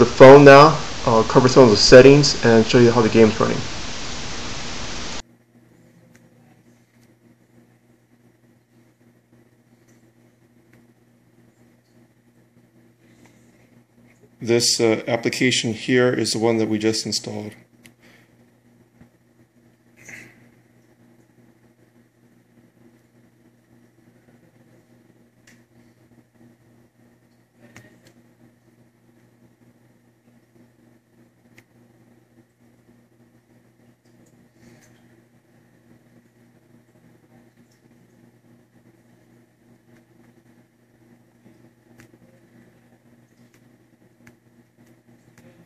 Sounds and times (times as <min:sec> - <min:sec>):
Inside, small room: 0:00.0 - 0:45.6.